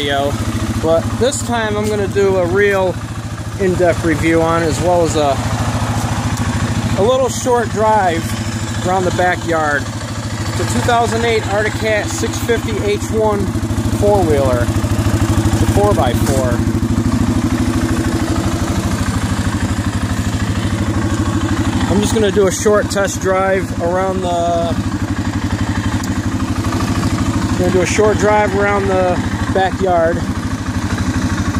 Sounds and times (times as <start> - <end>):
Speech: 0.0 - 5.4, 6.9 - 9.9, 10.5 - 14.7, 15.7 - 16.7, 21.9 - 24.8, 27.6 - 30.3.